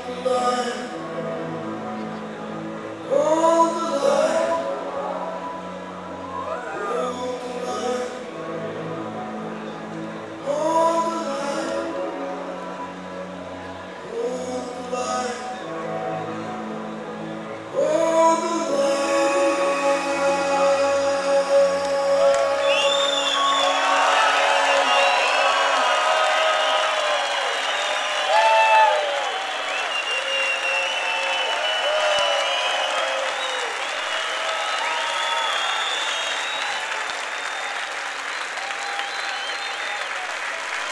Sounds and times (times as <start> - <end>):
Applause: 21.8 - 40.9.